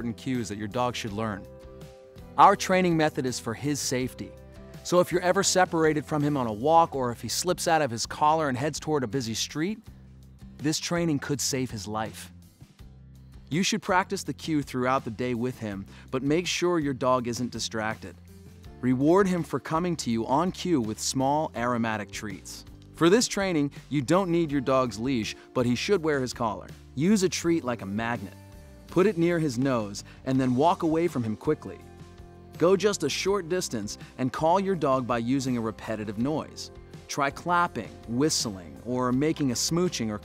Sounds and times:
Speech: 0.0s - 1.5s, 2.4s - 9.8s, 10.6s - 12.3s, 13.5s - 18.2s, 18.8s - 31.8s, 32.6s - 40.2s
Music: 0.0s - 40.2s.

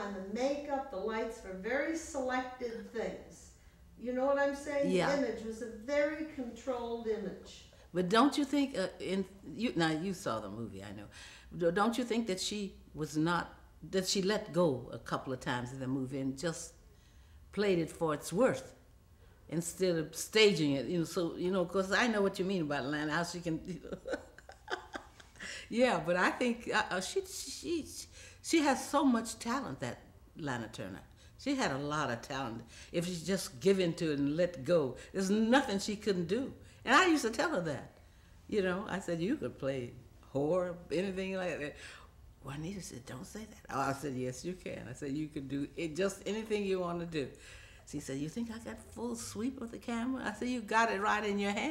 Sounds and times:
Conversation: 0.0s - 51.7s.

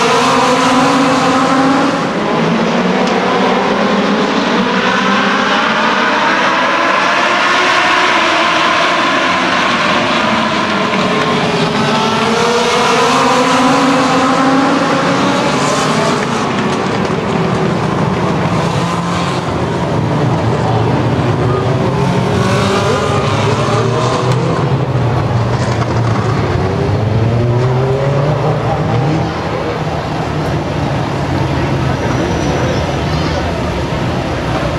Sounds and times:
Car: 0.0s - 34.7s.

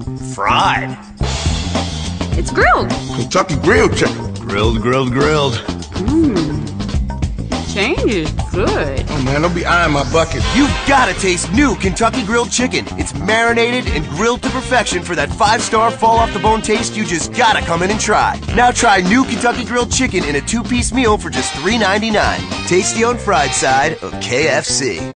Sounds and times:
Music: 0.0s - 25.1s
Speech: 7.8s - 25.1s.

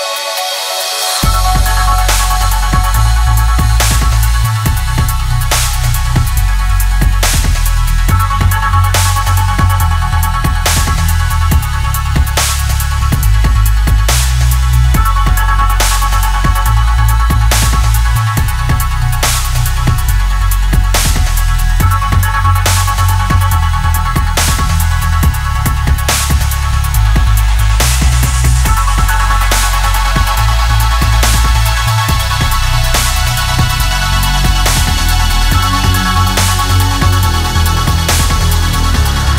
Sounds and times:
Dubstep: 0.0s - 39.3s
Trance music: 0.0s - 39.3s.

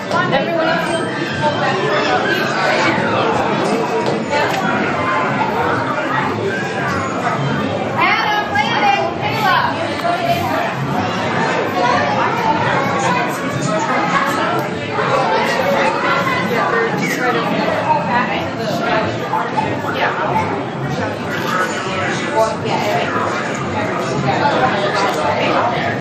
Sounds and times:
Speech: 0.0s - 26.0s.

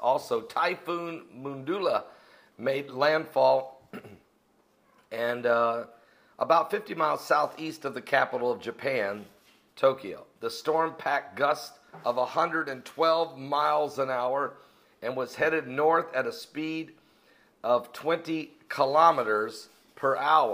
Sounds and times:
Speech: 0.0s - 3.8s, 5.1s - 17.0s, 17.6s - 20.5s.

